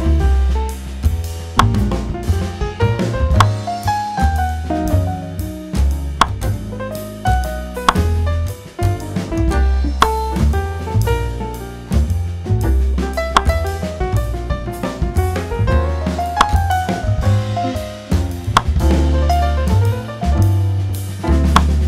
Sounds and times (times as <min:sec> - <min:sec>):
Music: 0:00.0 - 0:21.8.